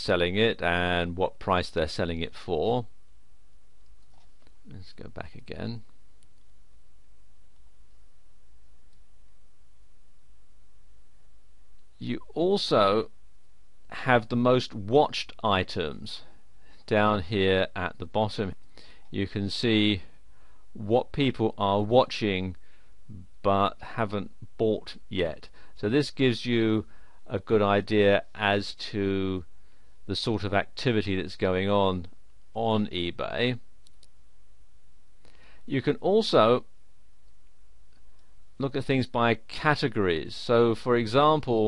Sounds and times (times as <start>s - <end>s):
Speech: 0.0s - 2.9s, 4.7s - 5.9s, 12.0s - 13.1s, 13.9s - 16.3s, 16.9s - 20.1s, 20.8s - 29.5s, 30.1s - 33.6s, 35.7s - 36.7s, 38.6s - 41.6s.